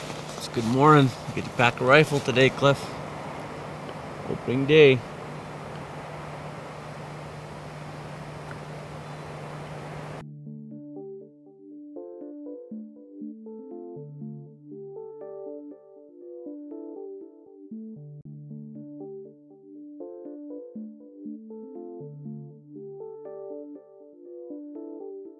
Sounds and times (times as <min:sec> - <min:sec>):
Speech: 0:00.4 - 0:03.0, 0:04.3 - 0:05.0.